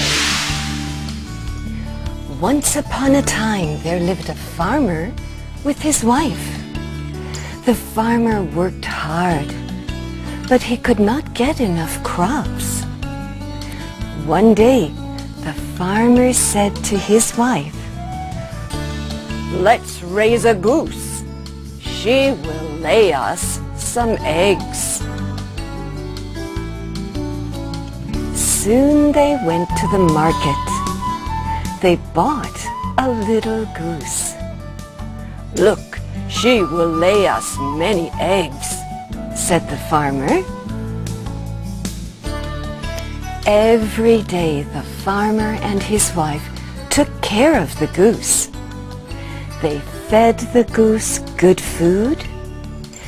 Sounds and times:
Music: 0.0 - 53.0
Speech: 2.3 - 6.6, 7.6 - 9.6, 10.5 - 12.9, 14.2 - 17.7, 19.5 - 21.2, 21.8 - 25.0, 28.4 - 30.8, 31.8 - 34.4, 35.6 - 38.8, 39.4 - 40.5, 43.4 - 48.5, 49.6 - 52.3.

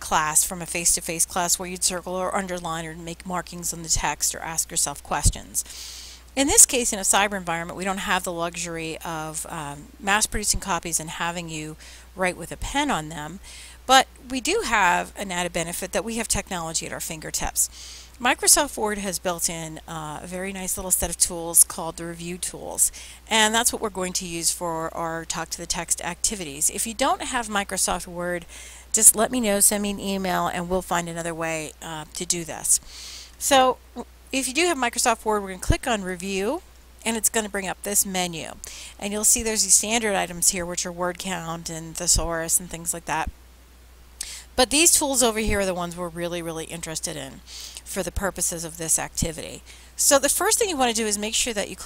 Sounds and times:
Speech: 0.0 - 5.6, 6.4 - 28.4, 29.0 - 32.8, 33.4 - 33.8, 34.4 - 43.3, 44.6 - 51.8.

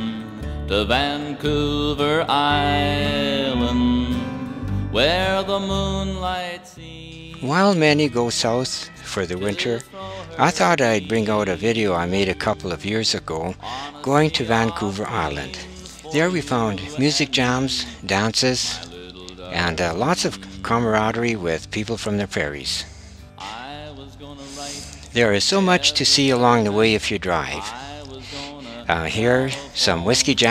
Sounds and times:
Speech: 7.4 - 23.6, 24.7 - 30.5
Traditional music: 7.6 - 22.1.

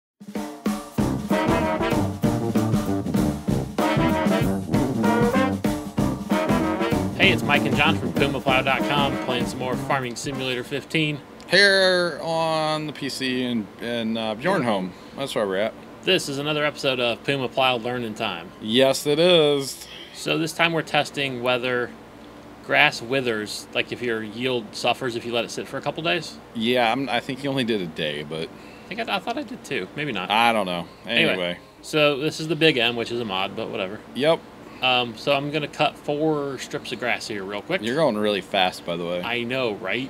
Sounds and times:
Trombone: 1.0 - 10.7.

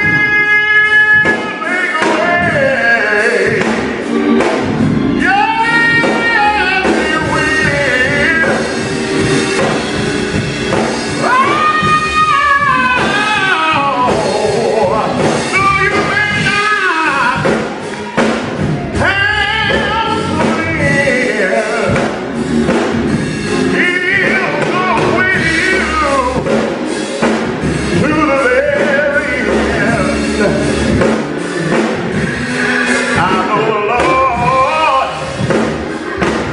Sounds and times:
Male singing: 0.0 - 3.8, 5.2 - 8.7, 11.2 - 17.6, 19.0 - 22.1, 23.7 - 26.5, 28.0 - 30.7, 33.0 - 35.3
Music: 0.0 - 36.5.

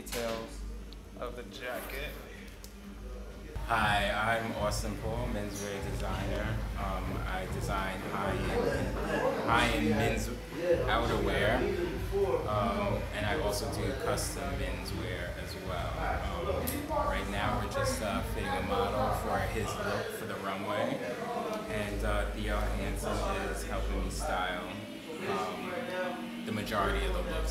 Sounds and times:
Speech: 3.6 - 27.5.

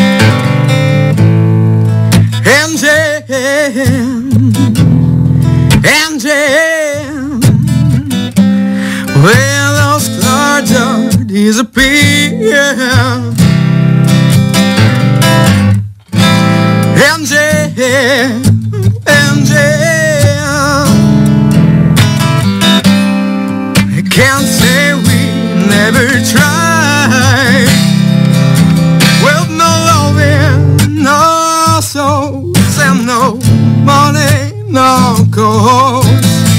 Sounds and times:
Music: 0.0 - 36.5.

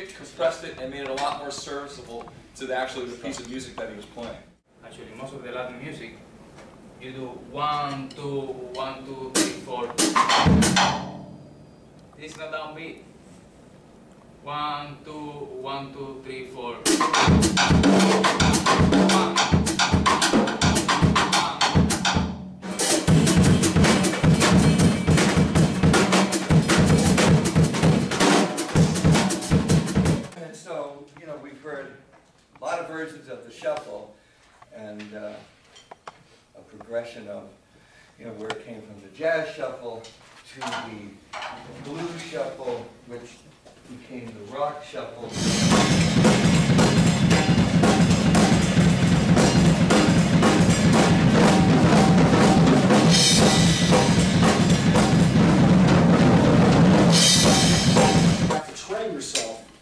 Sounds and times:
Speech: 0.0 - 6.2, 7.0 - 10.0, 12.2 - 13.1, 14.4 - 16.9, 21.3 - 21.8, 30.3 - 35.5, 36.6 - 37.6, 38.2 - 45.5, 58.5 - 59.8
Drum kit: 8.0 - 11.6, 16.8 - 30.4, 45.3 - 59.6
Drum: 9.3 - 11.4, 16.9 - 30.4, 45.3 - 59.5.

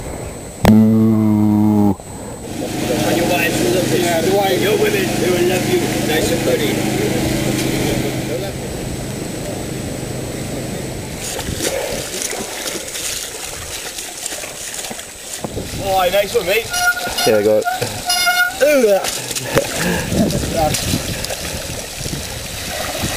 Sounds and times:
Water: 2.0 - 23.1
Speech: 2.7 - 8.6, 15.8 - 17.9
Bicycle: 11.1 - 22.4
Trickle, dribble: 11.3 - 23.1.

